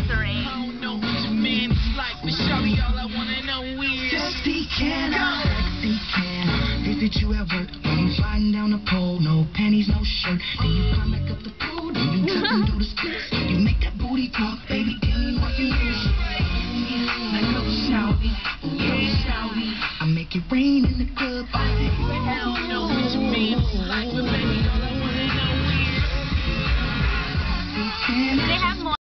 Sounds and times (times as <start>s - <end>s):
Speech: 0.0s - 0.6s, 22.0s - 23.0s, 28.4s - 29.0s
Music: 0.0s - 29.0s.